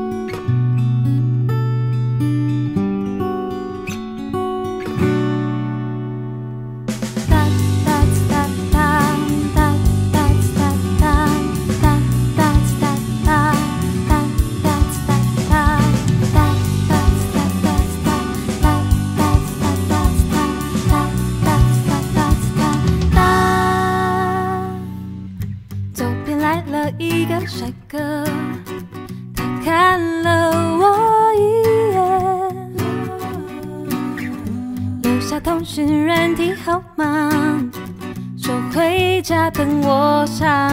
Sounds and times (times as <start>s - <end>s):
Music: 0.0s - 40.7s.